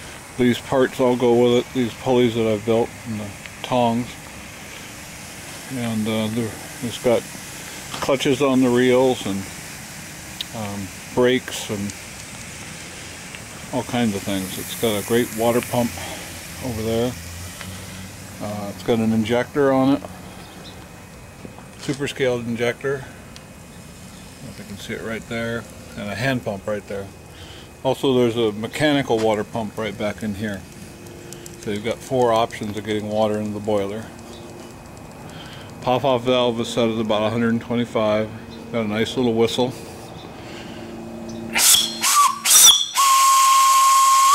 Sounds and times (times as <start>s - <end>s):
Hiss: 0.0s - 36.9s, 39.5s - 44.3s.